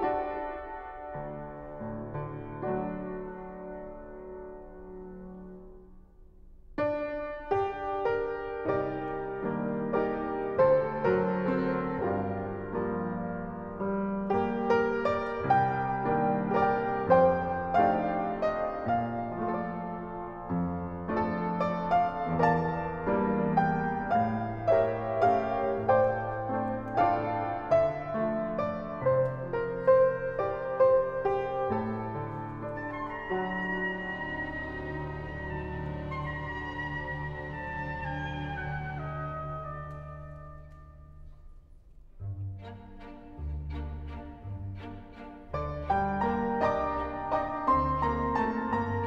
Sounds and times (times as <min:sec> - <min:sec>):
Music: 0:00.0 - 0:49.0.